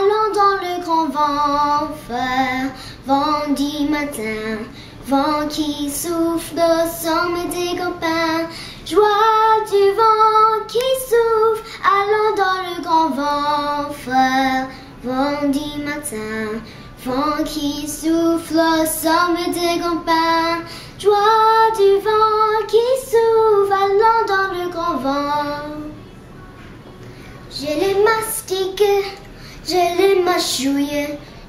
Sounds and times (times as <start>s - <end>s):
Child singing: 0.0s - 26.0s, 27.5s - 31.3s
Female singing: 0.0s - 26.7s, 27.4s - 31.3s.